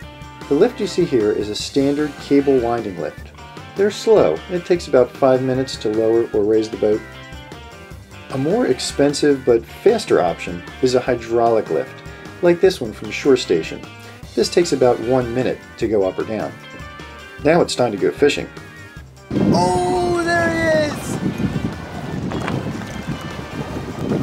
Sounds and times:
Music: 0.0 - 24.2
Speech: 0.5 - 3.2, 3.8 - 7.0, 8.3 - 13.8, 14.4 - 16.6, 17.4 - 18.5, 19.5 - 21.1.

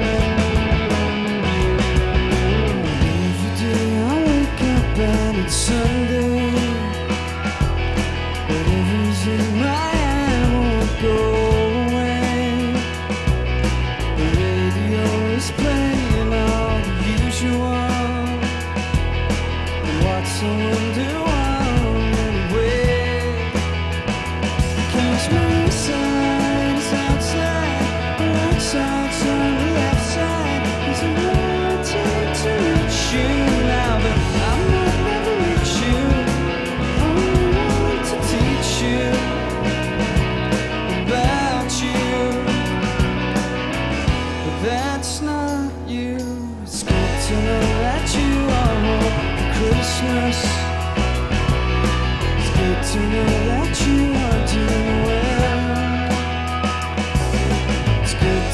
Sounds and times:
Music: 0.0 - 58.5.

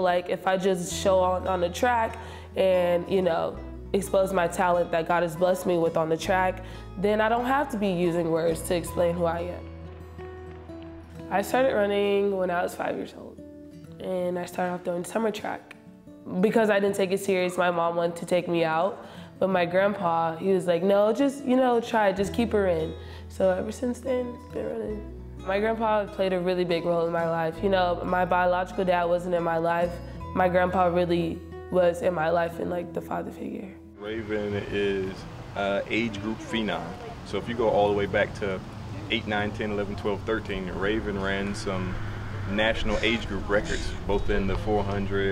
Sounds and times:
Music: 0.0 - 45.3.

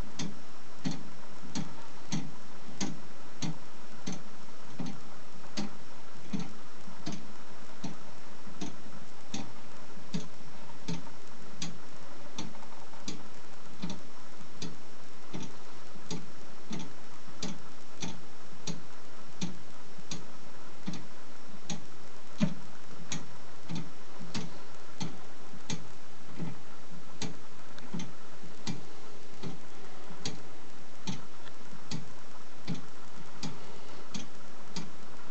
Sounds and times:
Tick-tock: 0.2 - 8.0, 10.1 - 11.8, 12.4 - 14.0, 14.6 - 18.8, 19.4 - 26.6, 27.2 - 29.6, 31.0 - 35.3.

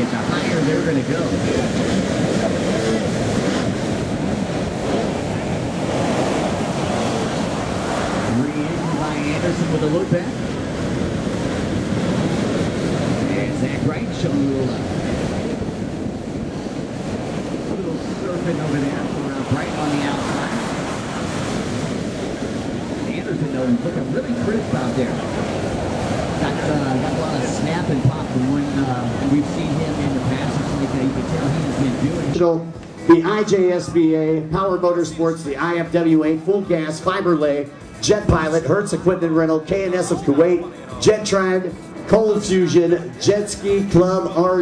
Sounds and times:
Speech: 0.0 - 3.2, 8.3 - 10.4, 13.2 - 14.9, 17.7 - 20.7, 23.1 - 25.5, 26.4 - 44.6.

